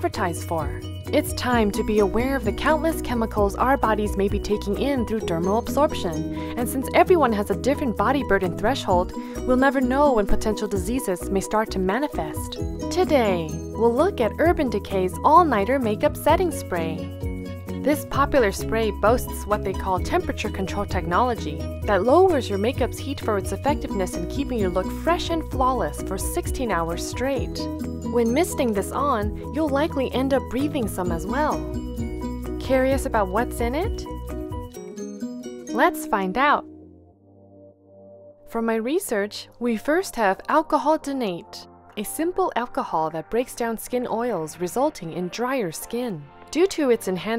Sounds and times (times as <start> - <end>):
Speech: 0.0 - 17.0, 17.9 - 27.6, 28.2 - 31.7, 32.6 - 34.0, 35.8 - 36.6, 38.5 - 47.3
Music: 0.0 - 47.3.